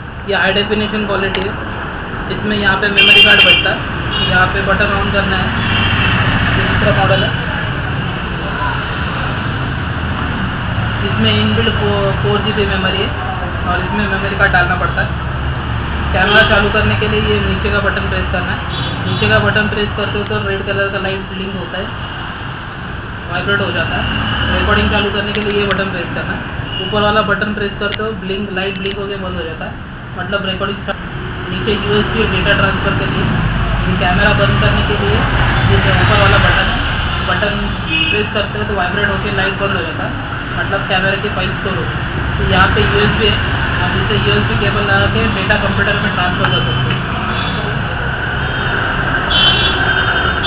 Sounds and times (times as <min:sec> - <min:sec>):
Speech: 0:00.3 - 0:01.6, 0:06.6 - 0:07.5, 0:11.0 - 0:15.1, 0:16.2 - 0:21.9, 0:23.3 - 0:48.0.